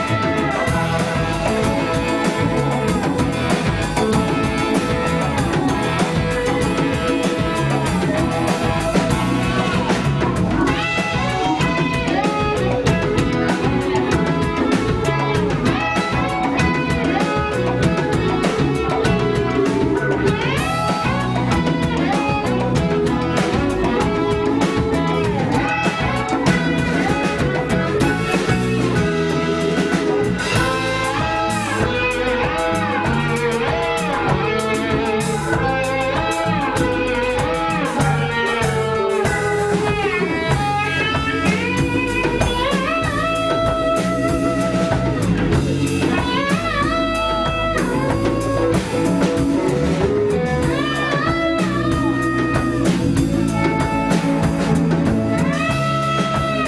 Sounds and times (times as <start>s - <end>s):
Music: 0.0s - 56.6s.